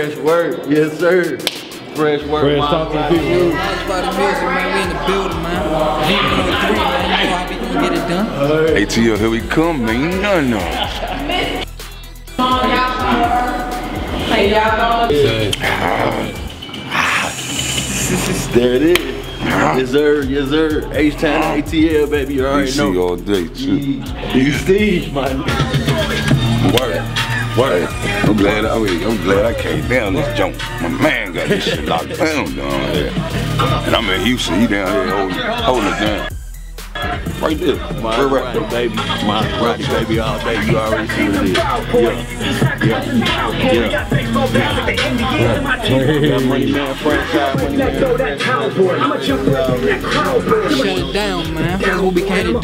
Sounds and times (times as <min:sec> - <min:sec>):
Music: 0:00.0 - 0:52.6.